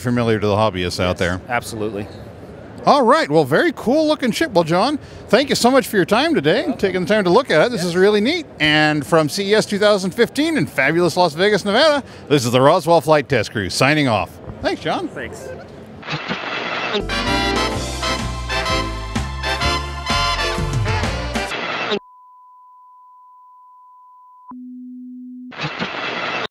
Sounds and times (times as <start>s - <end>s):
Sine wave: 22.0s - 25.5s.